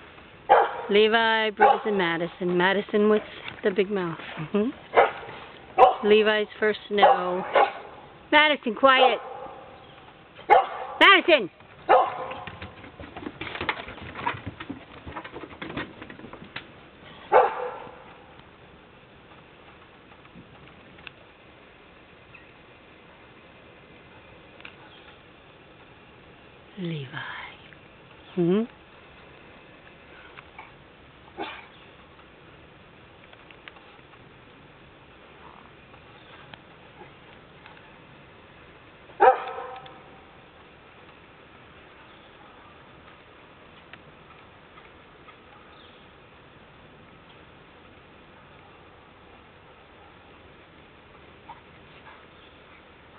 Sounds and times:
Dog: 0:00.5 - 0:00.9, 0:07.0 - 0:07.9, 0:10.5 - 0:11.0, 0:11.9 - 0:12.6, 0:17.3 - 0:18.0, 0:31.4 - 0:31.7, 0:39.2 - 0:40.0
Speech: 0:00.9 - 0:04.8, 0:06.0 - 0:07.5, 0:08.3 - 0:09.2, 0:11.0 - 0:11.5, 0:26.8 - 0:27.6.

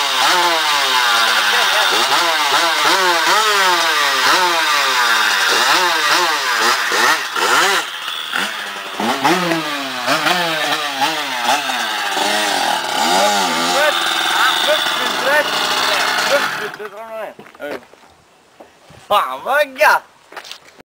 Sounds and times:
Speech: 0:13.2 - 0:17.8, 0:19.1 - 0:20.1.

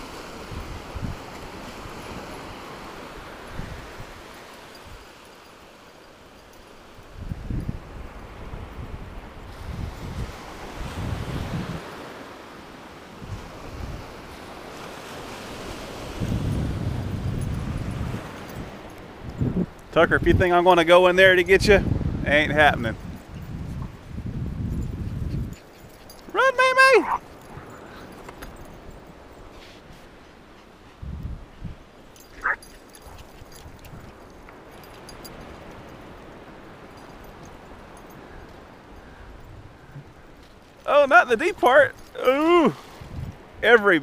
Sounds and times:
Ocean: 0:00.0 - 0:44.0
Outside, rural or natural: 0:00.0 - 0:44.0.

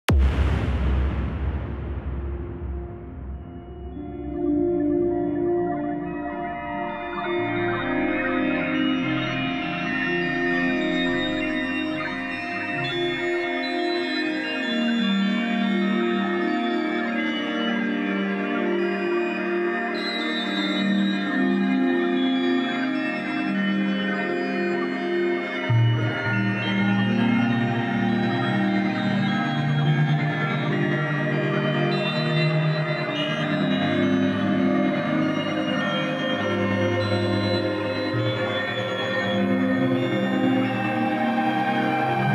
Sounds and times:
Electronic music: 0:00.0 - 0:42.3.

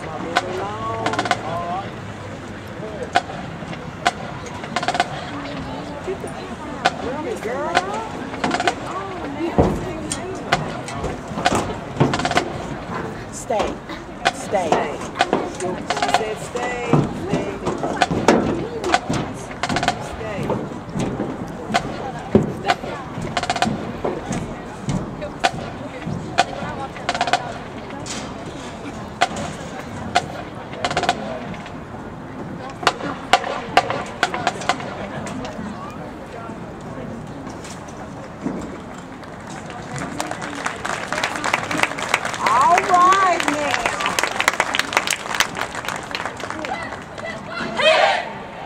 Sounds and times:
Speech: 0:12.9 - 0:20.8, 0:39.6 - 0:45.1.

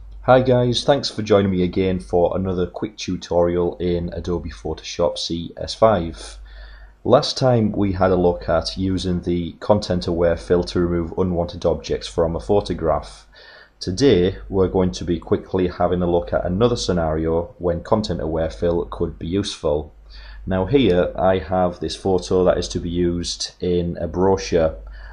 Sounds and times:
Speech: 0:00.3 - 0:06.4, 0:07.0 - 0:24.9.

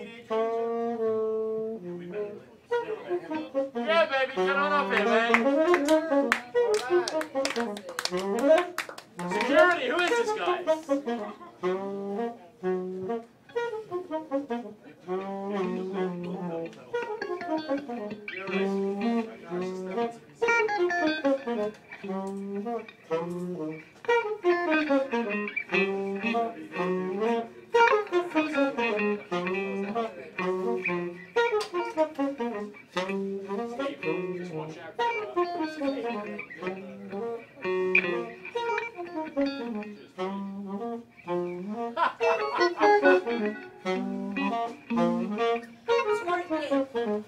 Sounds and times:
Speech: 0:00.0 - 0:00.4, 0:01.8 - 0:08.3, 0:09.2 - 0:11.4, 0:18.3 - 0:20.6, 0:28.5 - 0:30.9, 0:33.6 - 0:38.4, 0:46.1 - 0:47.0
Music: 0:00.0 - 0:47.2.

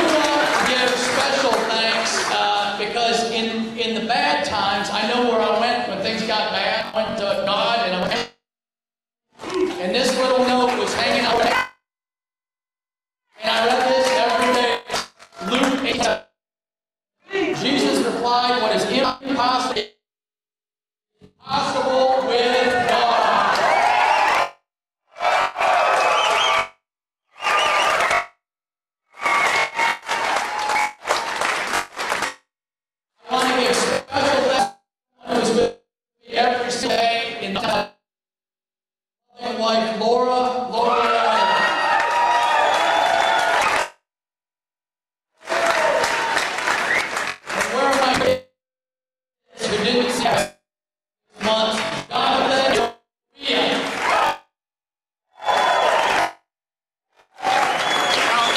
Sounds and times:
Narration, monologue: 0:00.0 - 0:08.4, 0:09.4 - 0:11.7, 0:13.3 - 0:16.3, 0:17.3 - 0:20.0, 0:33.2 - 0:38.0, 0:49.6 - 0:50.6, 0:51.3 - 0:53.9.

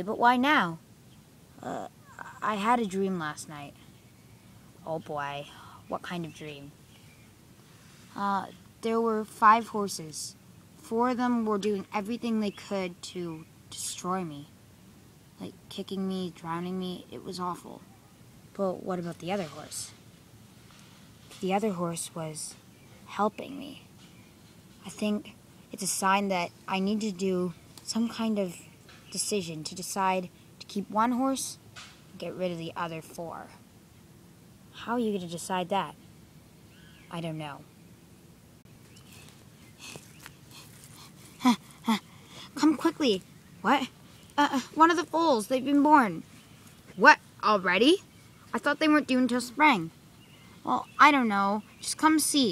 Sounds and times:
Speech: 0:00.0 - 0:00.8, 0:01.6 - 0:03.8, 0:04.8 - 0:06.8, 0:08.2 - 0:14.5, 0:15.4 - 0:17.8, 0:18.6 - 0:20.0, 0:21.4 - 0:23.8, 0:24.8 - 0:28.6, 0:29.2 - 0:31.6, 0:32.2 - 0:33.6, 0:34.8 - 0:36.0, 0:37.1 - 0:37.7, 0:42.6 - 0:46.2, 0:47.0 - 0:50.0, 0:50.6 - 0:52.5.

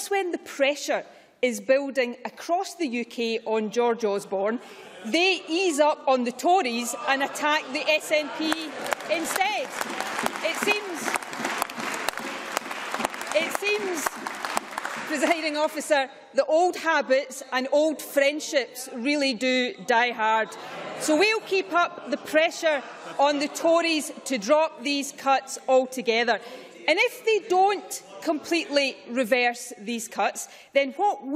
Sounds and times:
Speech: 0:00.0 - 0:09.8, 0:10.4 - 0:11.1, 0:15.1 - 0:31.3
Applause: 0:08.4 - 0:15.8.

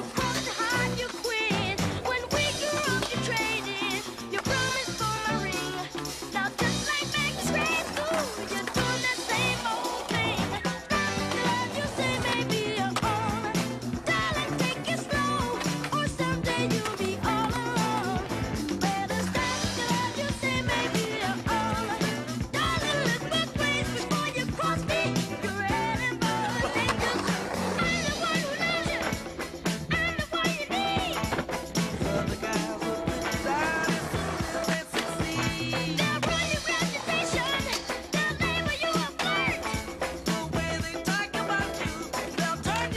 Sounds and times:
Music: 0:00.0 - 0:42.9.

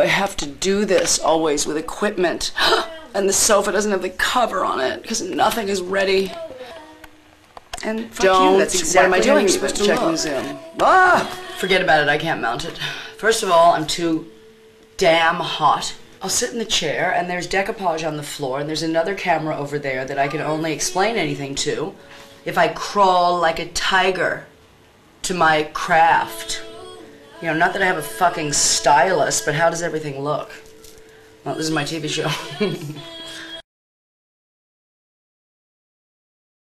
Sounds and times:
Speech: 0:00.0 - 0:06.4, 0:07.8 - 0:14.3, 0:15.0 - 0:24.5, 0:25.2 - 0:26.7, 0:27.4 - 0:30.6, 0:31.5 - 0:33.0
Music: 0:00.0 - 0:33.6.

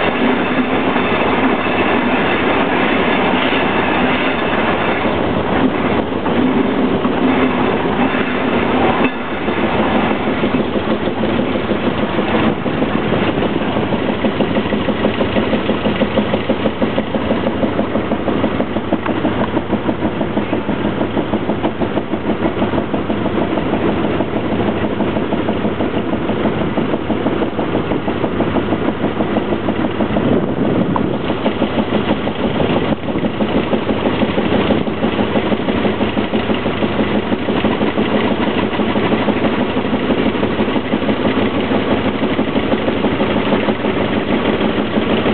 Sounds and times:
Vehicle: 0:00.0 - 0:45.3.

